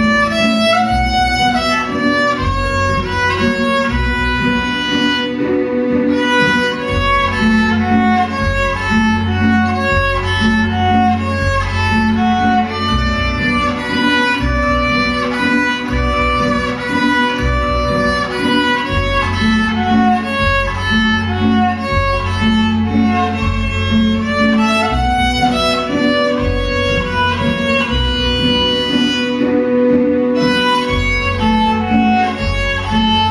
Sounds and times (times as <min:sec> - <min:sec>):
Violin, fiddle: 0:00.0 - 0:33.3.